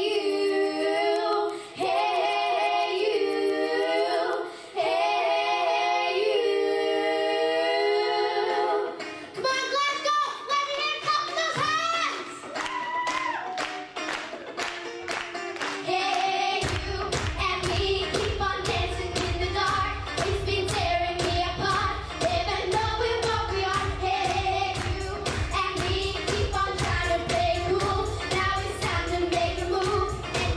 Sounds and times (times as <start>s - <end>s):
Choir: 0.0s - 9.1s, 15.9s - 30.5s
Child singing: 0.0s - 12.4s, 15.8s - 30.5s
Female singing: 15.9s - 30.5s.